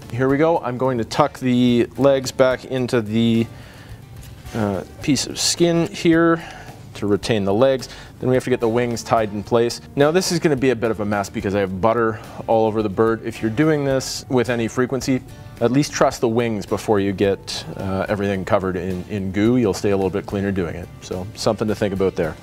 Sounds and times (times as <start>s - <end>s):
Music: 0.0s - 22.4s
Speech: 0.1s - 3.5s, 4.5s - 22.4s.